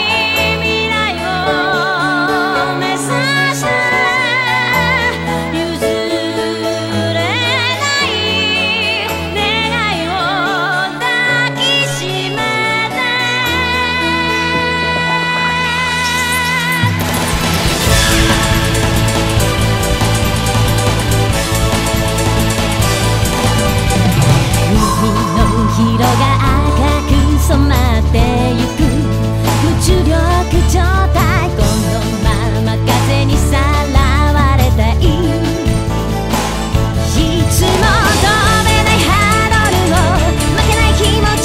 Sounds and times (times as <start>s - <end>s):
Video game music: 17.1s - 29.4s.